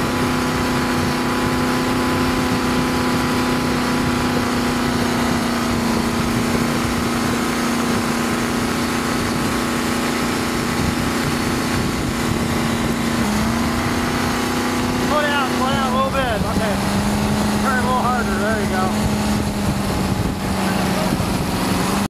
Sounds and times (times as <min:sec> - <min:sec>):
Speech: 0:15.1 - 0:16.8, 0:17.6 - 0:19.0.